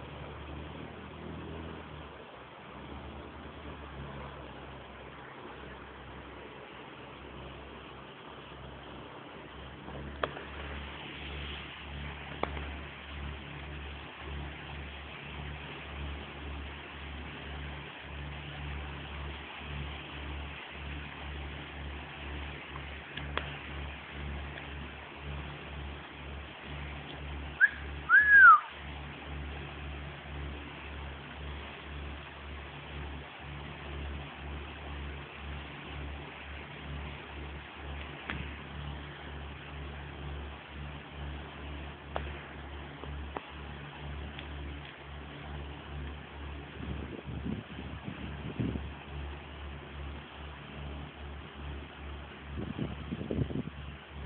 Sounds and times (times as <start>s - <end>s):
Motorboat, speedboat: 0.0s - 54.2s.